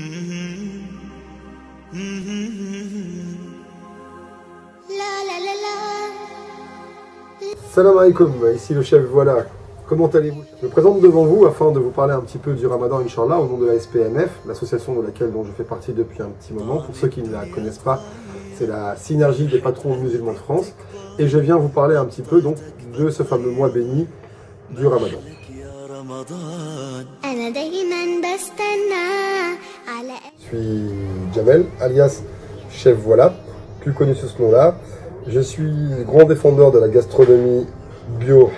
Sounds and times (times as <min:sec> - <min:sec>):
Music: 0:00.0 - 0:38.5
Speech: 0:07.6 - 0:24.1, 0:24.7 - 0:25.8, 0:30.4 - 0:38.5.